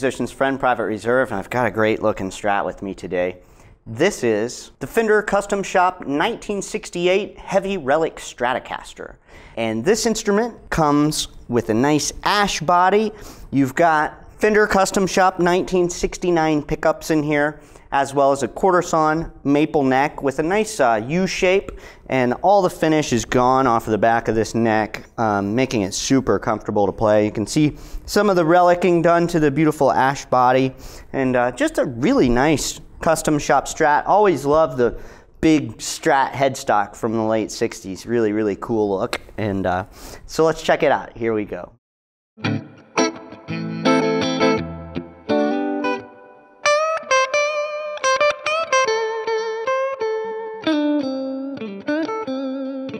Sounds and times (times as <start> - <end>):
Speech: 0.0 - 41.8.